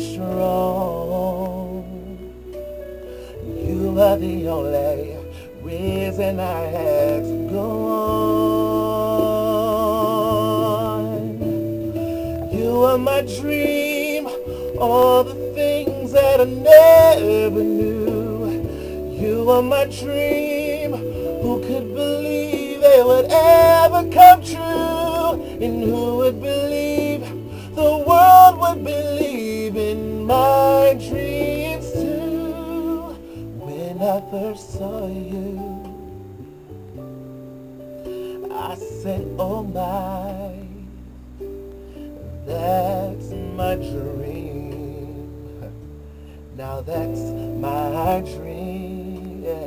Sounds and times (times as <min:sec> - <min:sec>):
Inside, small room: 0:00.0 - 0:49.6
Music: 0:00.0 - 0:49.6.